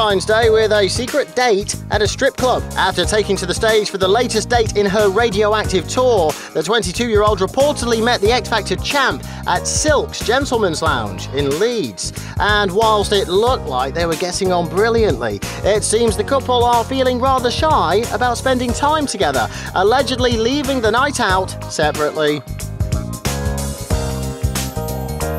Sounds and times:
Speech: 0.0 - 22.4
Music: 0.0 - 25.3.

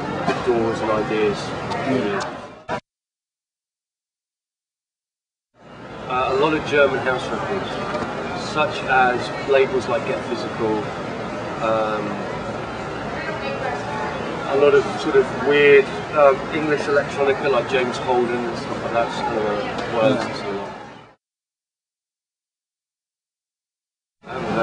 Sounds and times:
Inside, public space: 0.0 - 2.8, 5.6 - 21.2, 24.2 - 24.6
Speech: 0.3 - 2.3, 6.1 - 7.8, 8.4 - 10.9, 11.6 - 12.3, 14.5 - 20.7, 24.3 - 24.6.

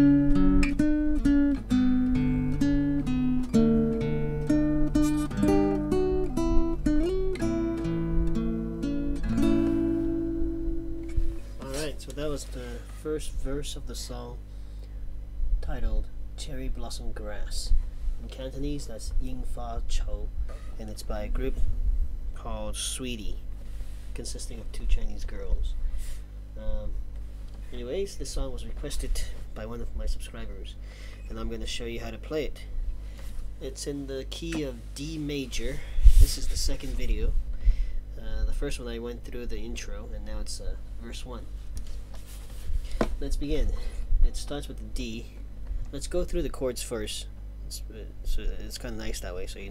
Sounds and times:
Strum: 0.0 - 14.2
Speech: 11.6 - 14.4, 15.6 - 21.7, 22.4 - 23.4, 24.1 - 25.8, 26.6 - 27.0, 27.7 - 32.7, 33.6 - 37.4, 38.2 - 41.5, 43.2 - 49.7.

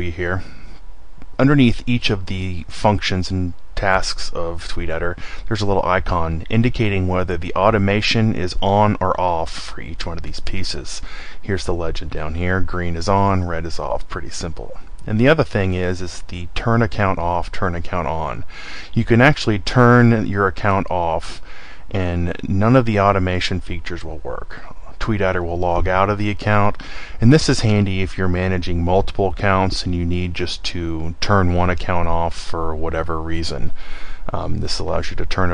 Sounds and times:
Speech: 0.0 - 0.6, 1.4 - 35.5.

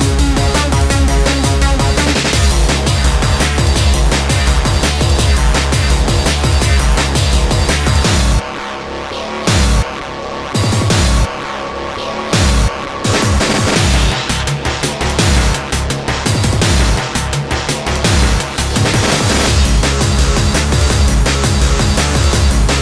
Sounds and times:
Music: 0.0 - 22.8.

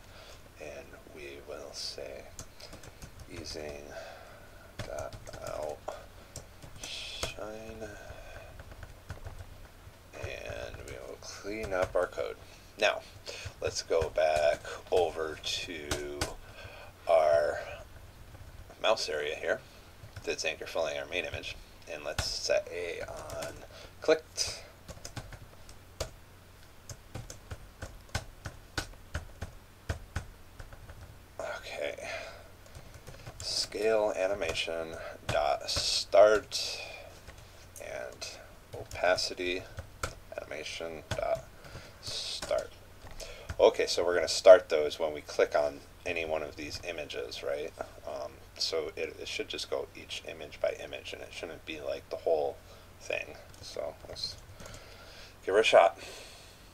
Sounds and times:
Speech: 0.6 - 2.4, 3.3 - 4.1, 4.8 - 6.0, 6.8 - 8.5, 10.2 - 16.4, 17.1 - 17.8, 18.8 - 19.6, 20.2 - 24.7, 31.4 - 32.4, 33.4 - 37.0, 37.8 - 39.7, 40.3 - 42.7, 43.6 - 54.4, 55.4 - 56.0
Computer keyboard: 2.2 - 3.9, 4.8 - 6.0, 6.6 - 9.5, 10.2 - 12.2, 13.4 - 16.4, 23.0 - 23.7, 24.4 - 26.2, 26.9 - 31.1, 32.6 - 37.4, 38.1 - 40.2, 41.0 - 43.7, 53.3 - 54.8.

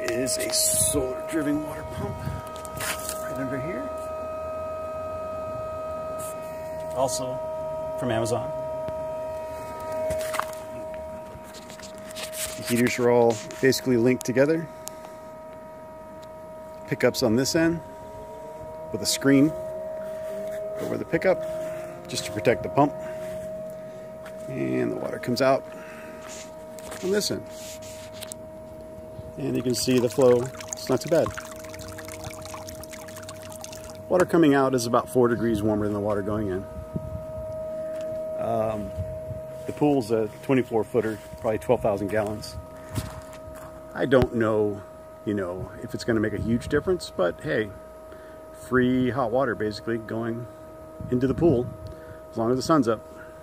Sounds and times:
Speech: 0.0 - 2.2, 3.2 - 4.0, 7.0 - 7.4, 8.0 - 8.5, 12.6 - 14.7, 16.9 - 17.8, 18.9 - 19.6, 20.8 - 21.4, 22.1 - 23.0, 24.4 - 25.7, 27.0 - 27.5, 29.4 - 31.3, 34.1 - 36.7, 38.4 - 38.9, 39.7 - 42.6, 44.0 - 47.8, 48.6 - 50.5, 51.1 - 51.7, 52.4 - 53.0
Pour: 29.6 - 34.0.

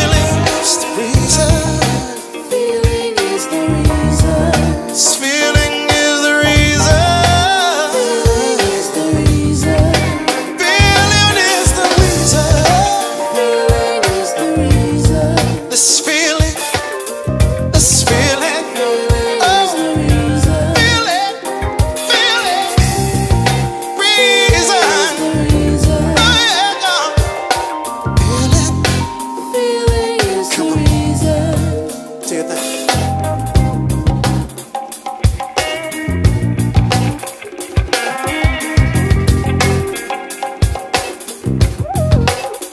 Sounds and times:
Singing: 0.0 - 17.1, 17.8 - 33.0
Soul music: 0.0 - 42.7.

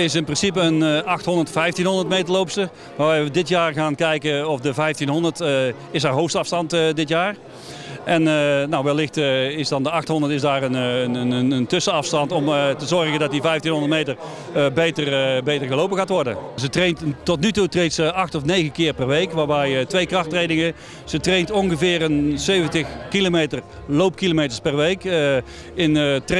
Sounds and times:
Speech: 0.0 - 7.4, 8.0 - 26.3
Outside, urban or manmade: 0.0 - 26.3.

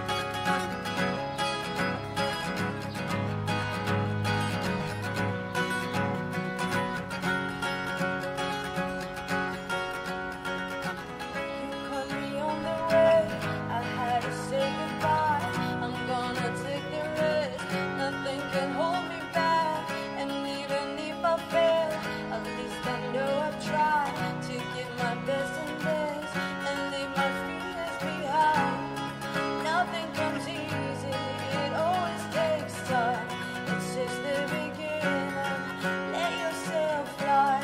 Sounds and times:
Music: 0.0 - 37.6.

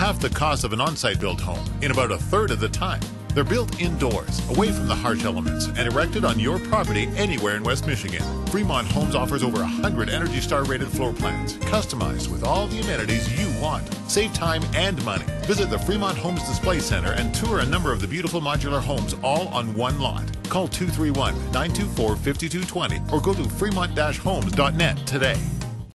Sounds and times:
Speech: 0.0 - 25.5
Music: 0.0 - 25.9.

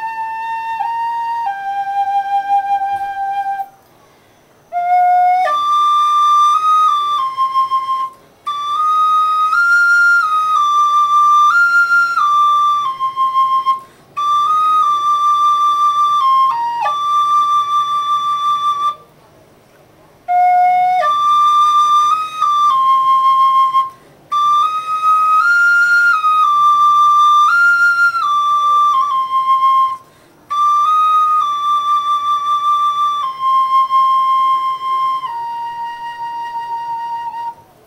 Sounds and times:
Flute: 0.0 - 19.4, 20.0 - 37.8.

